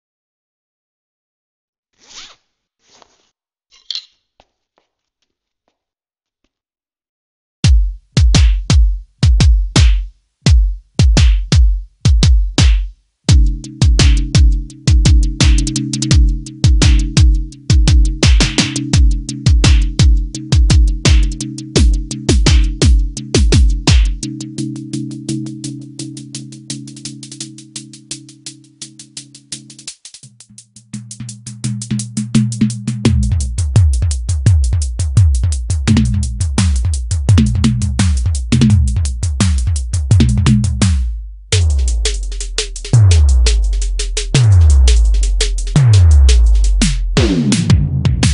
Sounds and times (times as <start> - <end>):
Bass drum: 7.7 - 24.6, 29.8 - 48.3
Drum kit: 7.7 - 48.3.